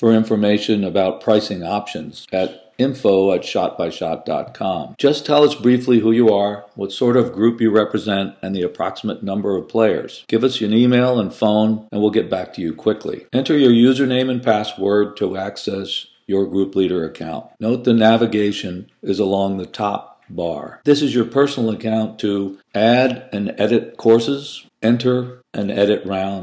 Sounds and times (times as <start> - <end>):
Speech: 0.0 - 26.4.